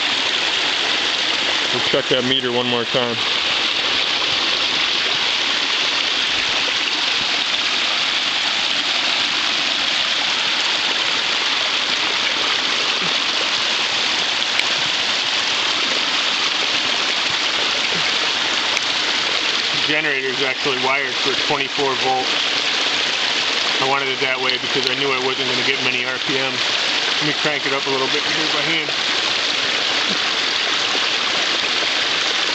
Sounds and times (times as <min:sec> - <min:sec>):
Raindrop: 0:00.0 - 0:32.5.